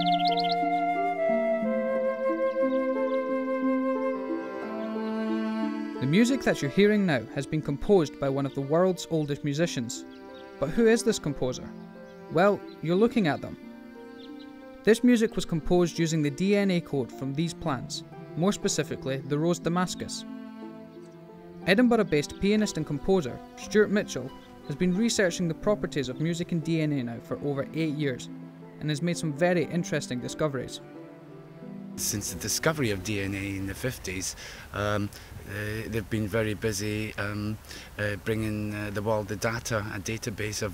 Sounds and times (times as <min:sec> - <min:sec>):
Music: 0:00.0 - 0:35.0, 0:35.6 - 0:40.7
Speech: 0:06.0 - 0:10.0, 0:10.6 - 0:11.7, 0:12.4 - 0:13.6, 0:14.9 - 0:20.2, 0:21.7 - 0:30.8, 0:32.0 - 0:40.7.